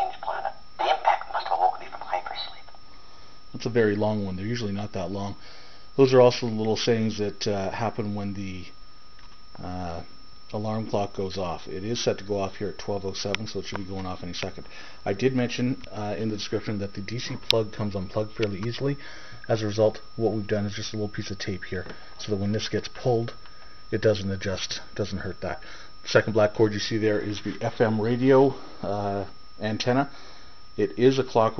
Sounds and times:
Speech: 0.0 - 2.7, 3.5 - 5.4, 6.0 - 8.8, 9.6 - 30.1, 30.8 - 31.5.

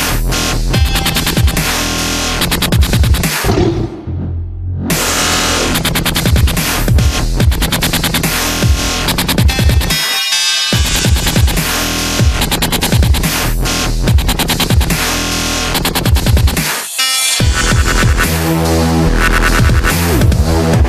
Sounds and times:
Dubstep: 0.0 - 4.0, 4.8 - 20.8.

